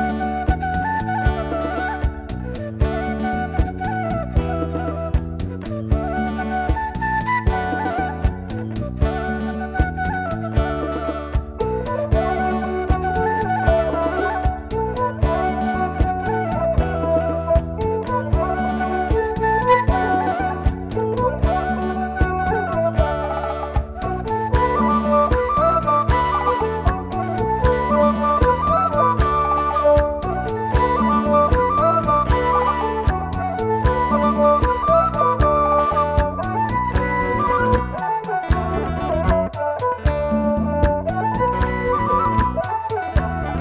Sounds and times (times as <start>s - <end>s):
Gospel music: 0.0s - 43.6s.